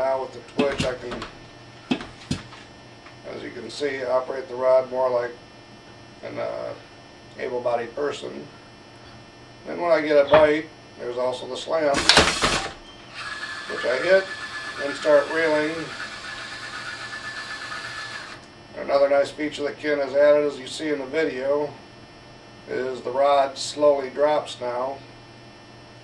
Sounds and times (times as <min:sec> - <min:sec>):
Speech: 0:00.0 - 0:01.3, 0:03.2 - 0:05.4, 0:06.2 - 0:06.8, 0:07.4 - 0:08.5, 0:09.6 - 0:12.0, 0:13.7 - 0:16.0, 0:18.8 - 0:21.8, 0:22.7 - 0:25.1.